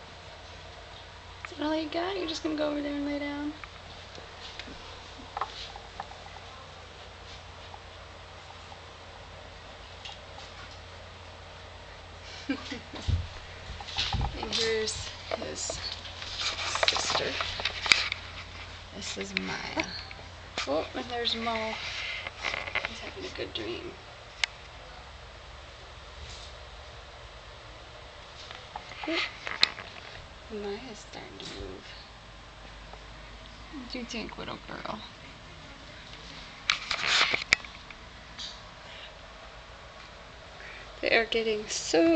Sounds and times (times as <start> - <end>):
Speech: 1.5 - 3.6, 14.4 - 15.9, 19.0 - 20.0, 20.6 - 21.8, 22.9 - 24.0, 30.5 - 32.1, 33.7 - 36.0, 41.0 - 42.1.